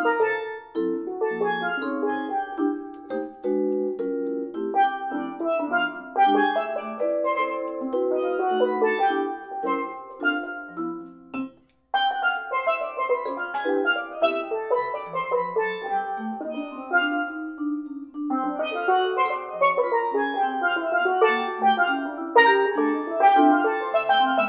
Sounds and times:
Inside, small room: 0.0s - 24.4s
Steelpan: 0.0s - 24.4s
Vibraphone: 0.0s - 24.4s.

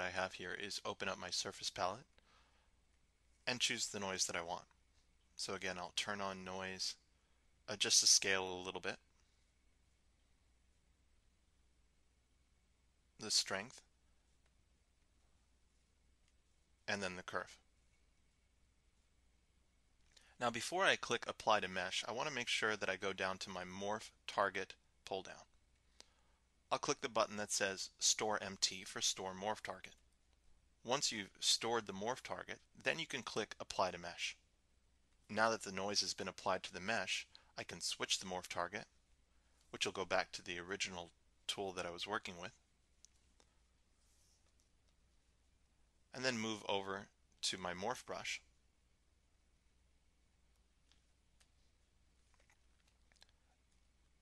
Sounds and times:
Speech: 0.0s - 2.1s, 3.4s - 4.7s, 5.4s - 7.0s, 7.7s - 9.1s, 13.2s - 13.9s, 16.9s - 17.7s, 20.4s - 25.6s, 26.7s - 30.0s, 30.8s - 34.4s, 35.3s - 39.0s, 39.7s - 42.6s, 46.1s - 48.5s.

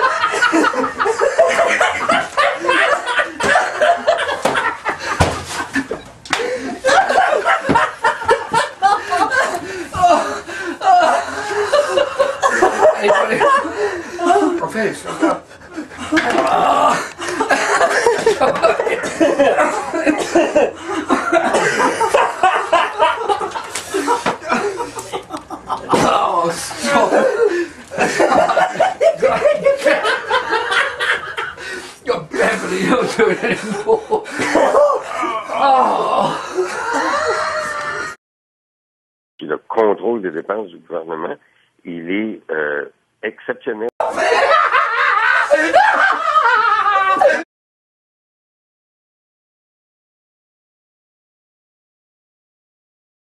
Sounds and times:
Laughter: 0.0s - 38.2s, 44.0s - 47.5s
Male speech, man speaking: 13.0s - 13.5s, 14.3s - 15.4s, 26.0s - 27.2s, 32.0s - 33.4s, 39.4s - 43.9s.

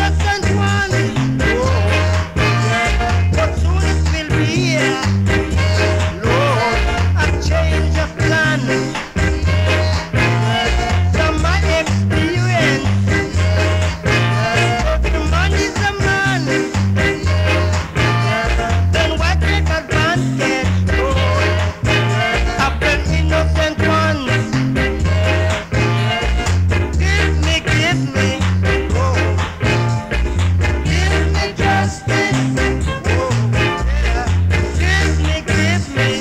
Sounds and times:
Ska: 0.0s - 36.2s.

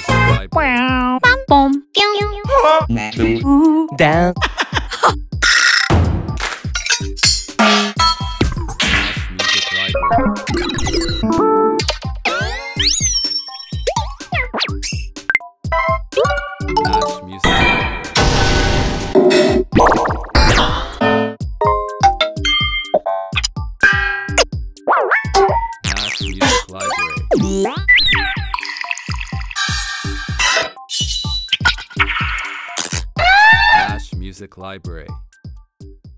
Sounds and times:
Music: 0.0s - 36.1s.

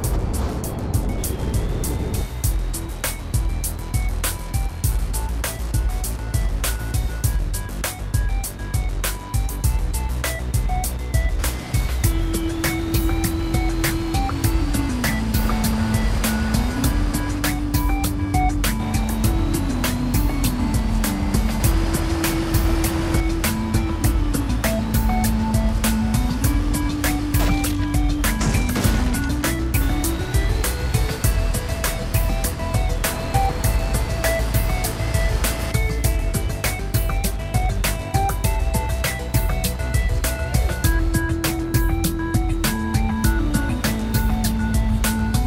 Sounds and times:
Music: 0.0s - 45.4s
Truck: 0.0s - 45.4s.

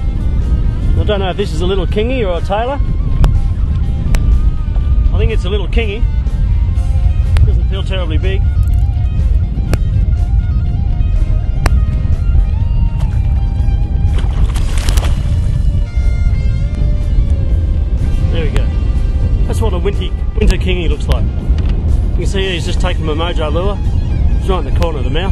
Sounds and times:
Music: 0.0s - 25.3s.

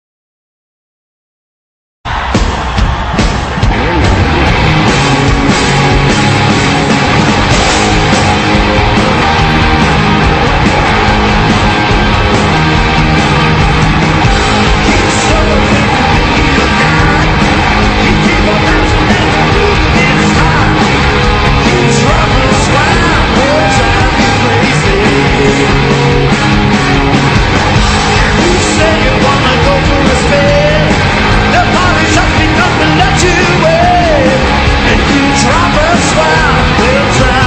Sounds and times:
Rock and roll: 2.1s - 37.4s.

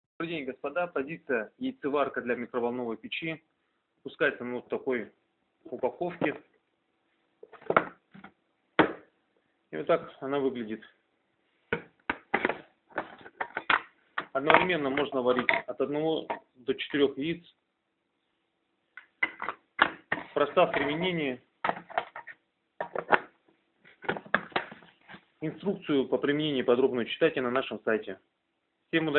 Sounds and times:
Speech: 0.2s - 6.5s, 9.7s - 11.0s, 14.3s - 17.6s, 20.4s - 21.5s, 25.4s - 28.3s, 28.9s - 29.1s.

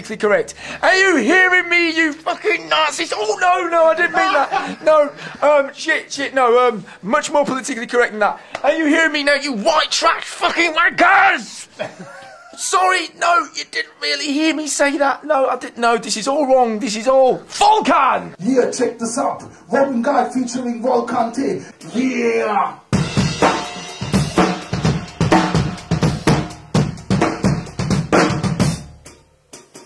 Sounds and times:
Speech: 0.0s - 11.7s, 12.6s - 22.8s.

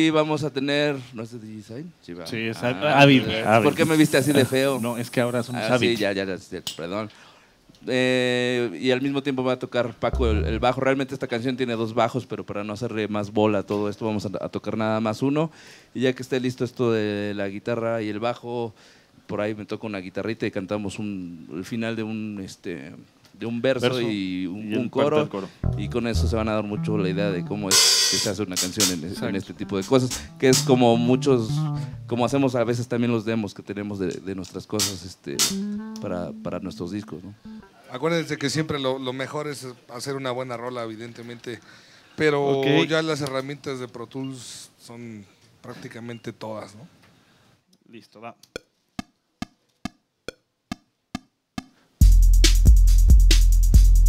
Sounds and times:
Speech: 0.0s - 7.1s, 7.8s - 18.7s, 19.3s - 41.6s, 42.2s - 46.9s, 47.9s - 48.4s.

